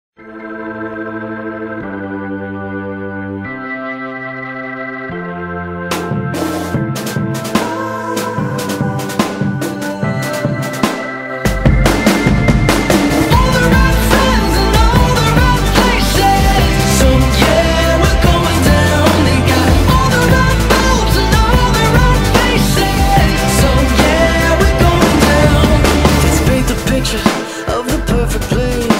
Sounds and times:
Music: 0:00.2 - 0:28.9.

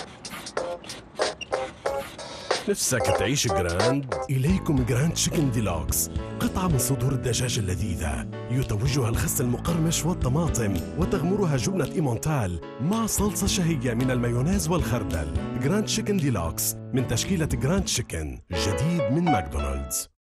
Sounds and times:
Music: 0:00.0 - 0:20.2
Speech: 0:02.7 - 0:20.1.

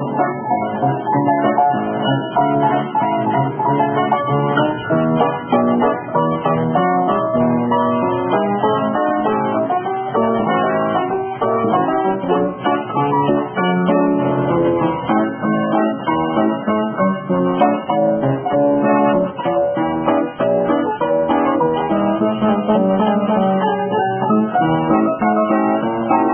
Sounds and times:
Music: 0:00.0 - 0:26.3.

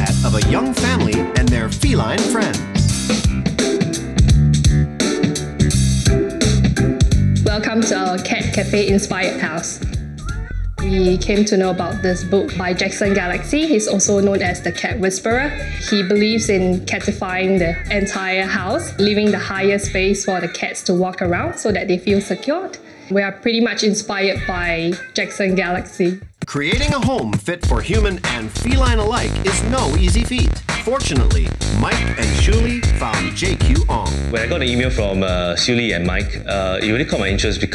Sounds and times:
Speech: 0:00.0 - 0:02.7, 0:07.5 - 0:09.8, 0:10.8 - 0:37.7
Music: 0:00.0 - 0:37.7.

